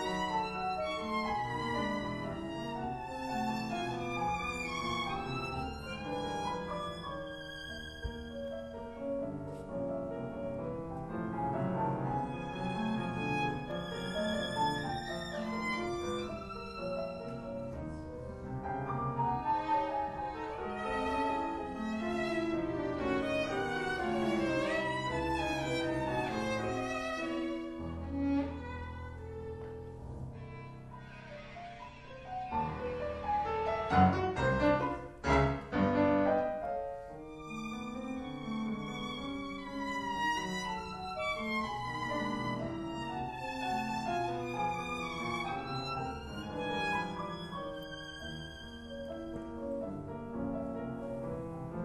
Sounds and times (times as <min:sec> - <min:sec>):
Violin, fiddle: 0:00.0 - 0:51.8.